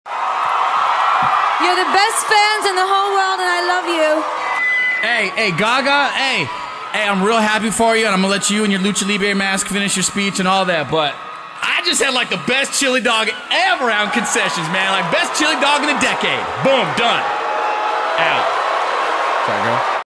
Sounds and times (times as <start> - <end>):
Male speech, man speaking: 5.0 - 17.3, 18.2 - 18.5, 19.4 - 19.9.